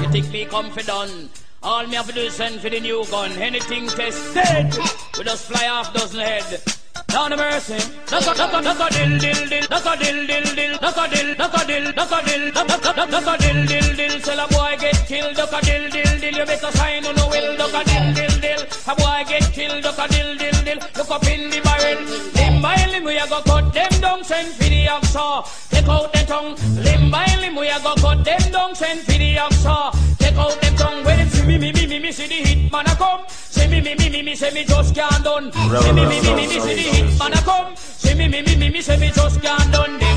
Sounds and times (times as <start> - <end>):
Music: 0.0 - 40.1.